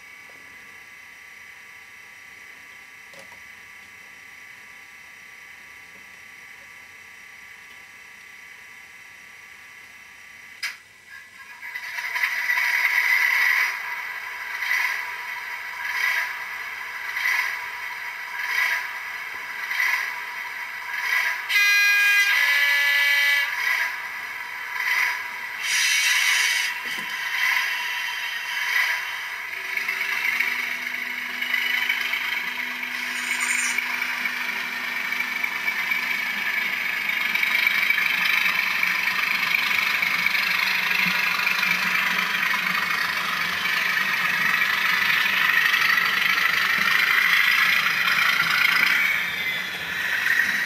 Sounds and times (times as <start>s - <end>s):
Hiss: 25.6s - 26.7s.